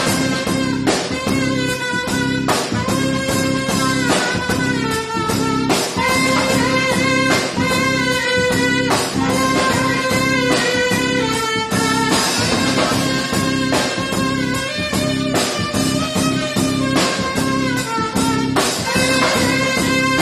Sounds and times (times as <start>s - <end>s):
Brass instrument: 0.0s - 20.2s
Jazz: 0.0s - 20.2s
Saxophone: 0.0s - 20.2s.